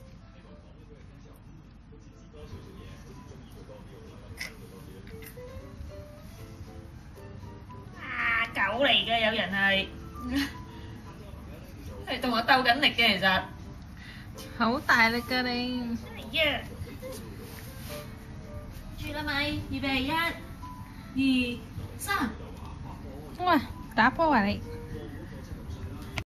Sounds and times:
Music: 0.0s - 26.2s.

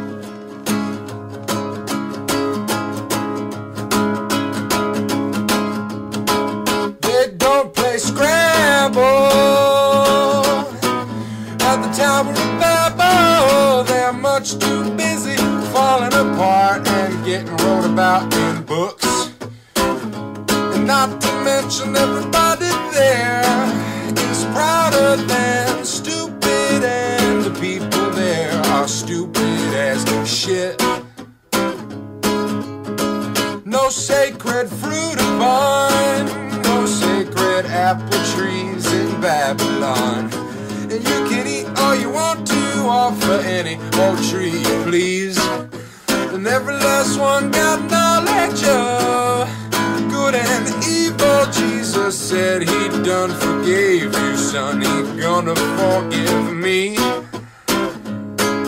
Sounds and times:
Music: 0.0s - 58.6s.

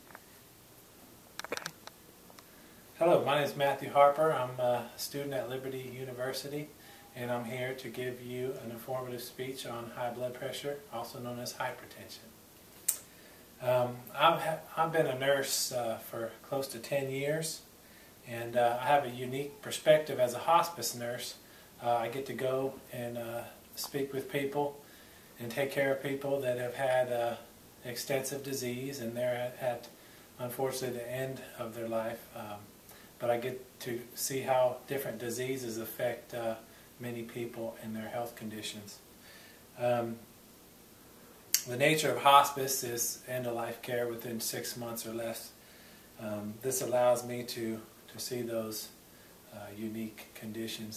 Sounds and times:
Narration, monologue: 0.0s - 50.9s
Male speech, man speaking: 3.0s - 12.3s, 13.6s - 17.7s, 18.3s - 24.8s, 25.4s - 39.0s, 39.8s - 40.3s, 41.6s - 45.6s, 46.2s - 50.9s.

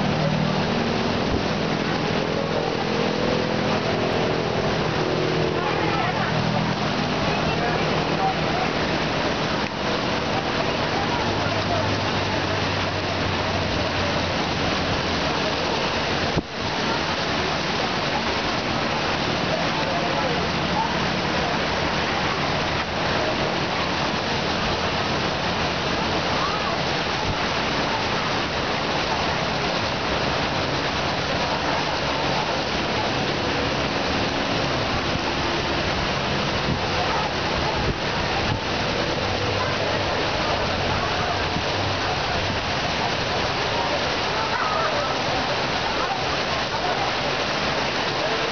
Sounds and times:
Hubbub, speech noise, speech babble: 0.0s - 48.5s.

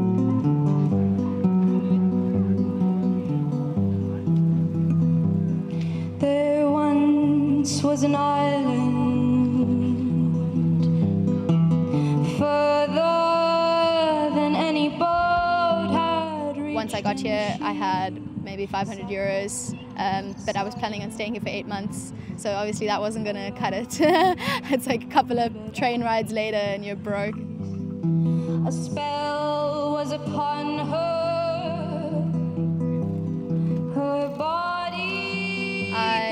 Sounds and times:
Music: 0.0s - 36.3s
Speech: 16.6s - 27.4s.

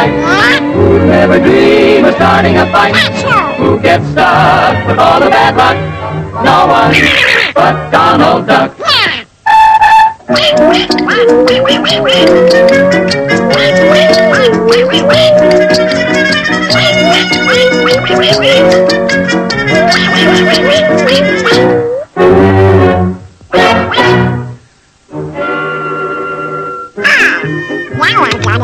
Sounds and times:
Music: 0.0s - 8.8s, 9.4s - 28.6s.

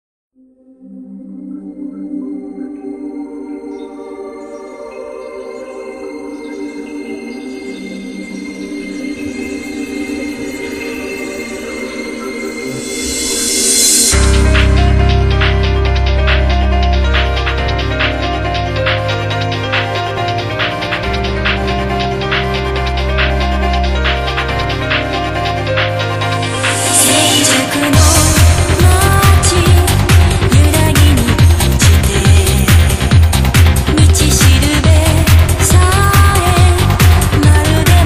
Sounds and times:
Music: 0.3s - 38.0s.

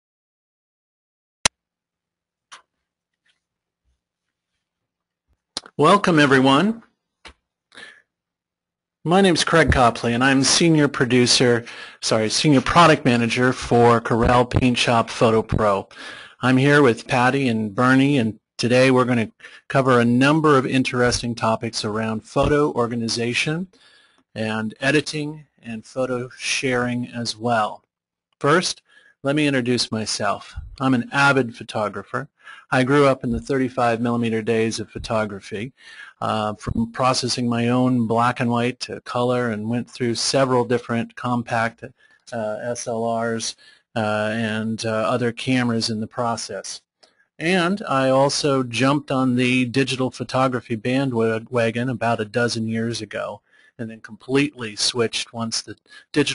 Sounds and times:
Speech: 5.6s - 6.9s, 9.0s - 23.8s, 24.4s - 27.8s, 28.4s - 46.8s, 47.4s - 56.3s.

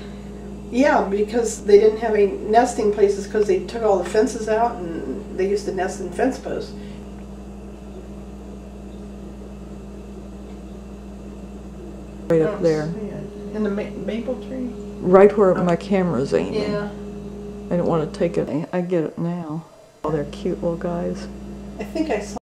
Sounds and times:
Speech: 12.3s - 17.0s, 17.7s - 22.4s.

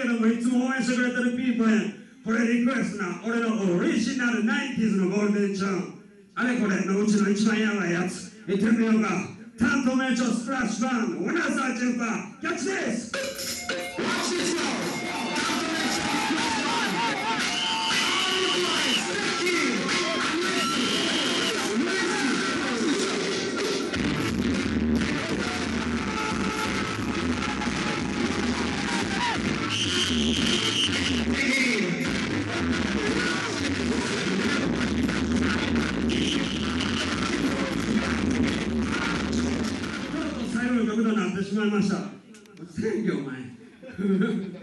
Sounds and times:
Music: 13.1s - 40.5s.

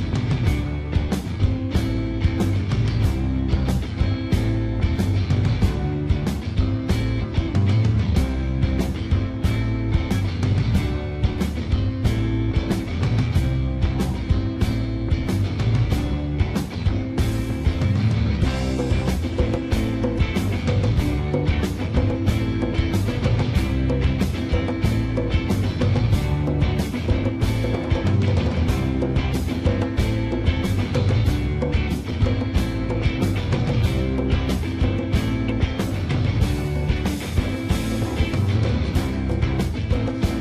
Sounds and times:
Music: 0.0s - 40.4s.

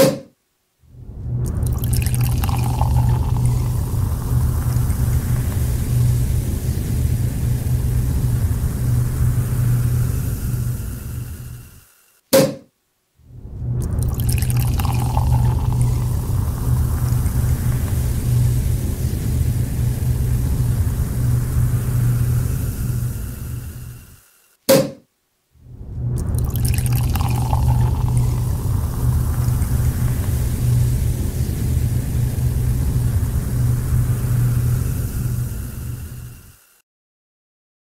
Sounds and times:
Frying (food): 1.8s - 11.9s, 14.2s - 24.4s, 26.5s - 36.8s.

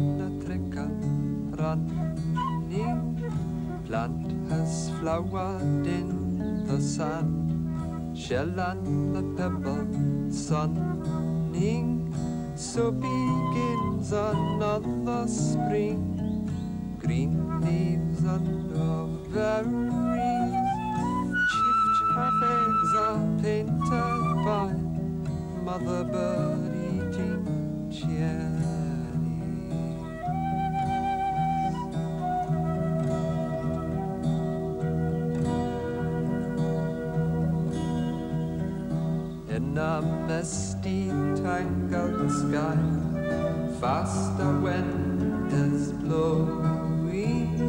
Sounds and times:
Music: 0.0s - 47.6s.

